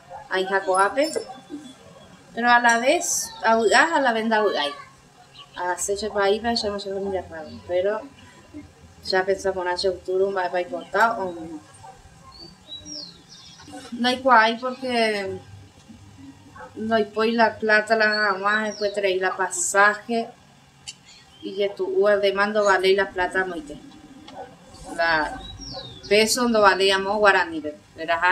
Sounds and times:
Speech: 0.3s - 1.7s, 2.4s - 5.0s, 5.6s - 11.7s, 13.7s - 15.5s, 16.8s - 20.4s, 21.4s - 23.8s, 24.8s - 25.5s, 26.1s - 28.3s.

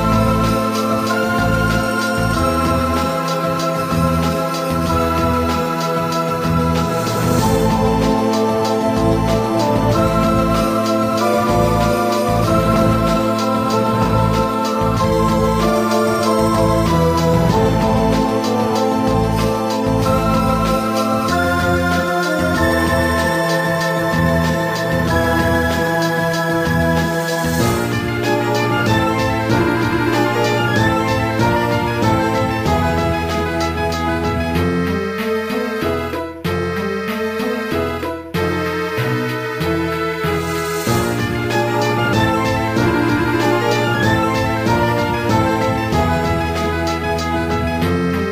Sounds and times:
Theme music: 0.0s - 48.3s.

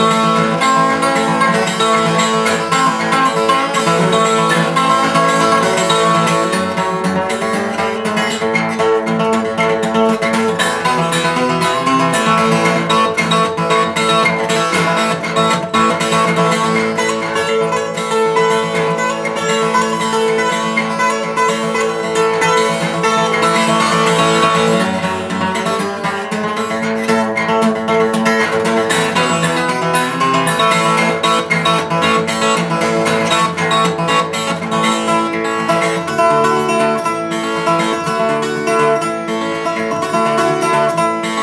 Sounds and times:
Music: 0.0s - 41.4s.

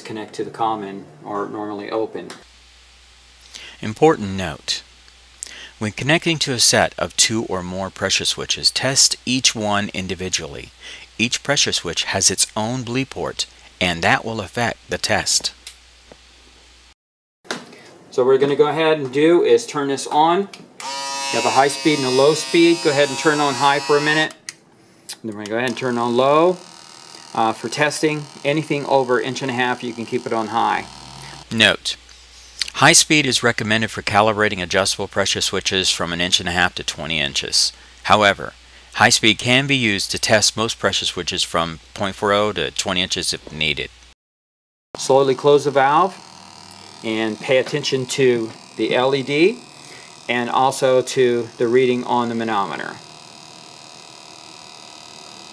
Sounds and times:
Speech: 0.0s - 2.4s, 3.8s - 4.8s, 5.8s - 15.6s, 18.1s - 20.6s, 21.3s - 24.4s, 25.2s - 26.6s, 27.4s - 32.0s, 32.6s - 43.9s, 45.0s - 46.2s, 47.0s - 49.6s, 50.3s - 53.0s
Electric shaver, electric razor: 20.8s - 24.3s, 25.7s - 31.6s, 45.0s - 55.5s.

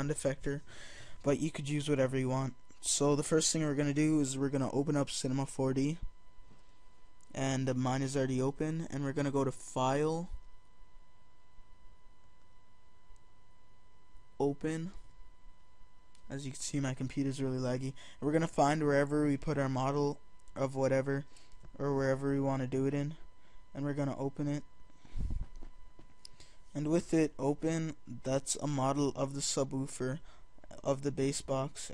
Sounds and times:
Speech: 0.0s - 6.1s, 7.3s - 10.4s, 14.4s - 15.0s, 16.3s - 23.2s, 23.8s - 24.7s, 26.7s - 31.9s.

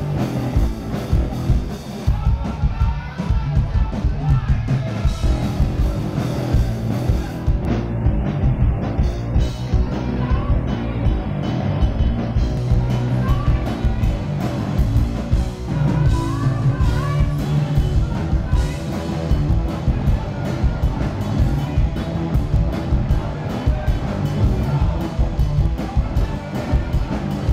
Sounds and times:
Guitar: 0.0s - 27.5s
Rock music: 0.0s - 27.5s
Singing: 1.1s - 7.6s, 12.4s - 27.5s
Speech: 1.4s - 7.4s, 9.4s - 11.4s.

